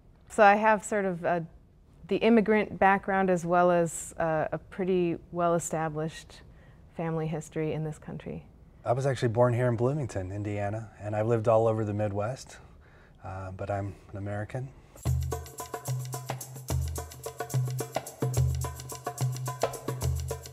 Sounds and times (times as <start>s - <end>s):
Speech: 7.0s - 12.6s, 13.2s - 14.8s.